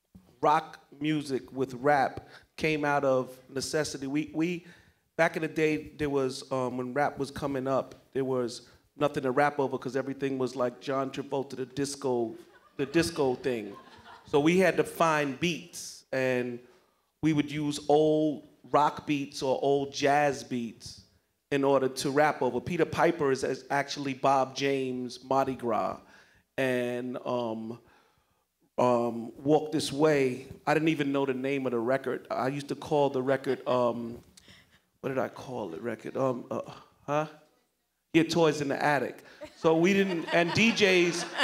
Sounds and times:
Speech: 0:00.4 - 0:04.6, 0:05.2 - 0:16.6, 0:26.6 - 0:27.8, 0:28.8 - 0:34.2, 0:35.0 - 0:37.4, 0:38.2 - 0:41.4.

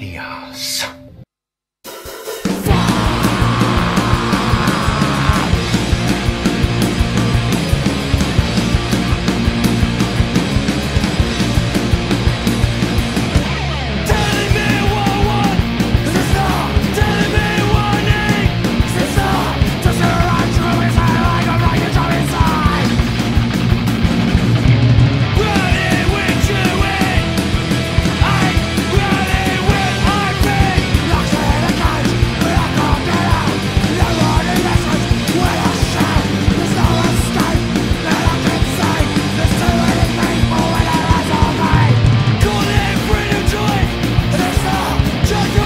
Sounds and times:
Heavy metal: 0:01.9 - 0:45.6
Progressive rock: 0:01.9 - 0:45.6
Punk rock: 0:02.1 - 0:45.6.

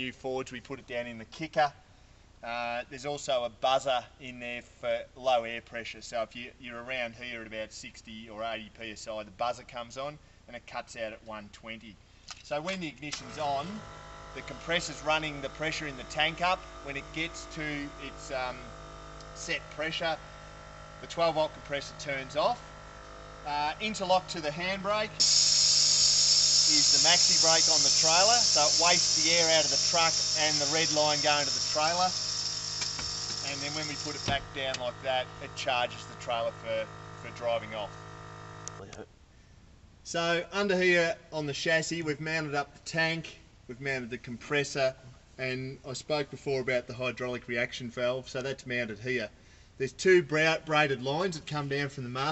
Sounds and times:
Speech: 0:00.0 - 0:01.8, 0:02.4 - 0:13.8, 0:14.4 - 0:18.7, 0:19.4 - 0:20.2, 0:21.0 - 0:22.6, 0:23.5 - 0:25.2, 0:26.7 - 0:32.2, 0:33.4 - 0:38.0, 0:38.8 - 0:39.1, 0:40.1 - 0:52.3.

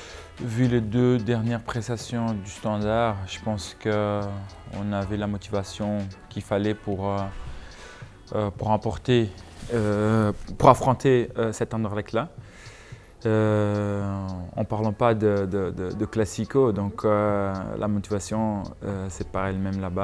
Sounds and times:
Music: 0:00.0 - 0:20.0
Speech: 0:00.4 - 0:07.3, 0:08.3 - 0:12.4, 0:13.2 - 0:20.0.

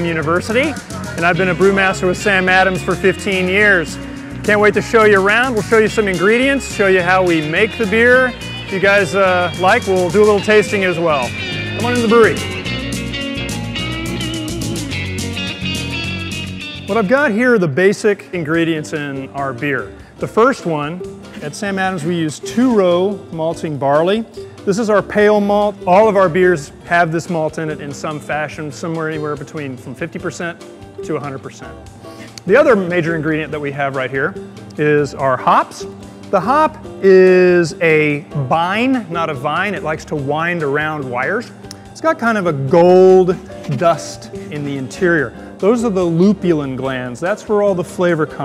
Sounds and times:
Speech: 0:00.0 - 0:12.4, 0:16.9 - 0:31.7, 0:32.5 - 0:48.4
Music: 0:00.0 - 0:48.4.

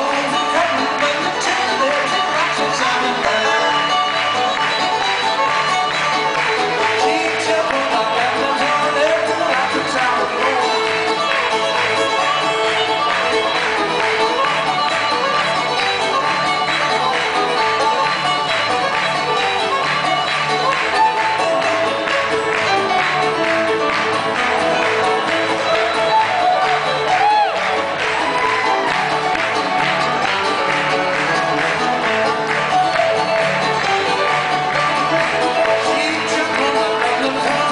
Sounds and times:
Music: 0:00.0 - 0:37.7.

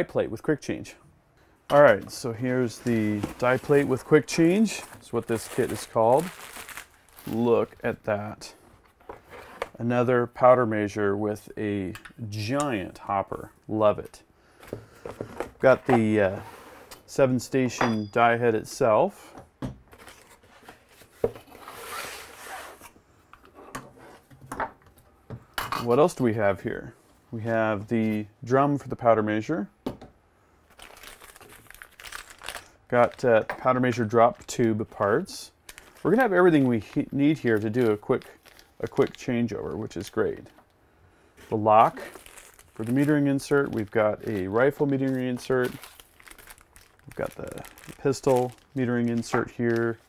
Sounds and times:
Speech: 0:00.0 - 0:01.0, 0:01.7 - 0:06.4, 0:07.2 - 0:08.6, 0:09.8 - 0:14.3, 0:15.6 - 0:16.5, 0:17.1 - 0:19.3, 0:25.8 - 0:29.8, 0:32.9 - 0:40.6, 0:41.5 - 0:42.2, 0:42.8 - 0:45.8, 0:47.1 - 0:50.0
Inside, small room: 0:00.0 - 0:50.0.

